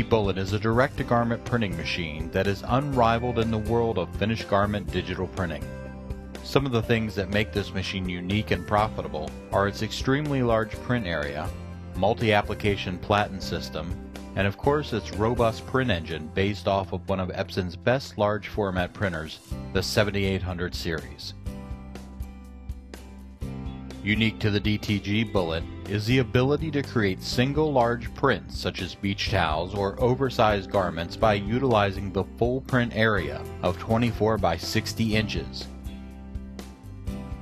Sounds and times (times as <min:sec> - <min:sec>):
Speech: 0:00.0 - 0:05.7, 0:06.4 - 0:21.4, 0:24.0 - 0:35.7
Music: 0:00.0 - 0:37.4.